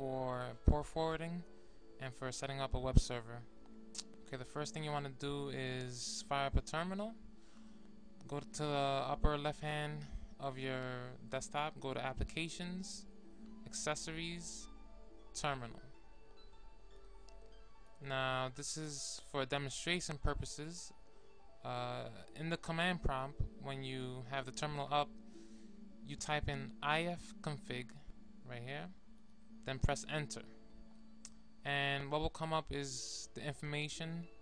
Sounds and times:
Speech: 0.0s - 7.2s, 8.2s - 13.1s, 13.7s - 14.7s, 15.4s - 15.9s, 18.0s - 20.9s, 21.7s - 25.1s, 26.1s - 29.0s, 29.7s - 30.6s, 31.6s - 34.4s.

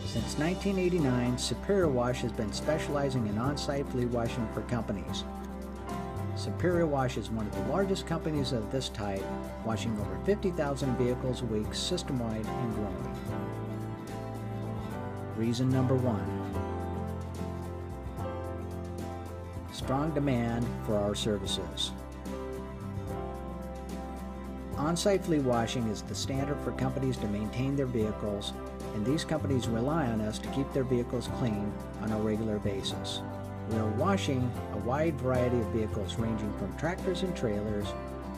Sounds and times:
Speech: 0.0s - 5.3s, 6.4s - 13.2s, 15.4s - 16.5s, 19.7s - 22.0s, 24.8s - 38.0s
Music: 0.0s - 38.3s.

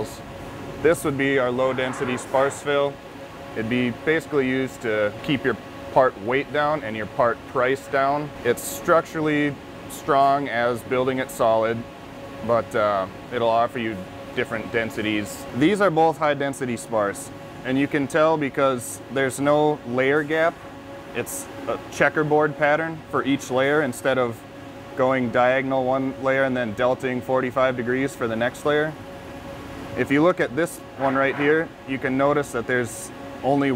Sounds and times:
Speech: 0.0s - 0.2s, 0.8s - 3.0s, 3.6s - 11.8s, 12.4s - 20.6s, 21.2s - 24.4s, 25.0s - 29.0s, 30.0s - 33.7s.

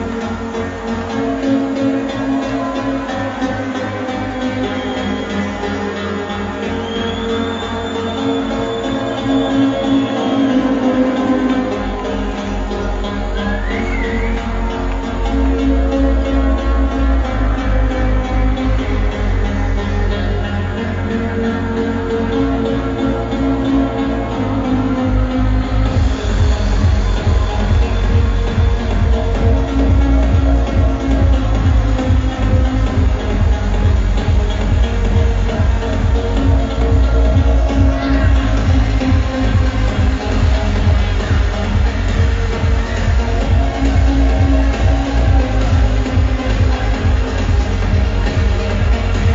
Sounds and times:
Cheering: 0.0s - 18.1s, 23.8s - 49.3s
Music: 0.0s - 49.3s.

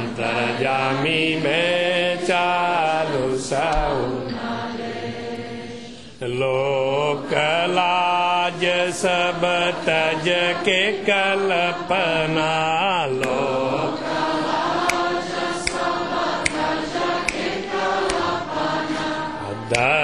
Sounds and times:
Mantra: 0.0s - 20.0s.

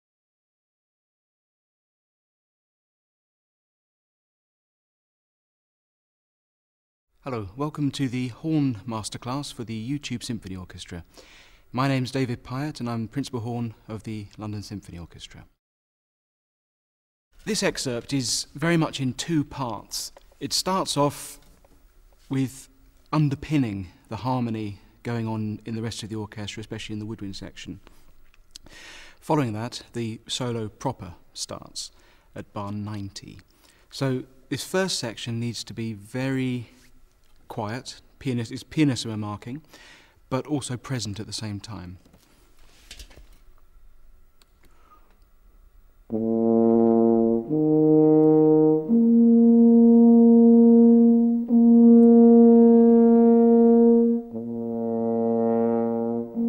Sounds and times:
Speech: 7.2s - 11.1s, 11.7s - 15.6s, 17.4s - 21.4s, 22.3s - 27.9s, 29.2s - 36.8s, 37.5s - 39.6s, 40.3s - 42.1s.

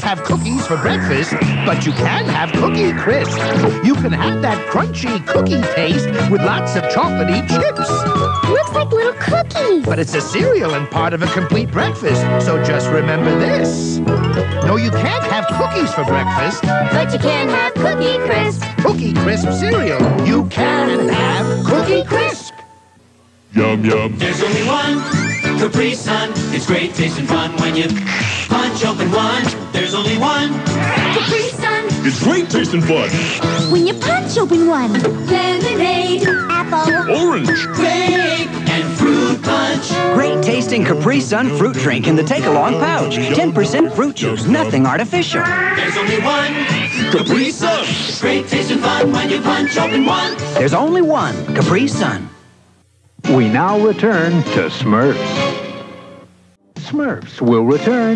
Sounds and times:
Music for children: 0.0s - 22.8s, 24.2s - 28.0s, 28.6s - 52.2s.

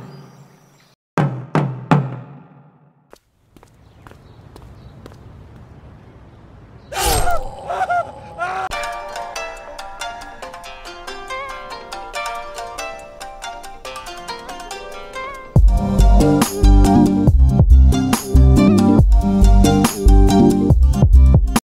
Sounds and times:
Music: 8.7s - 21.6s.

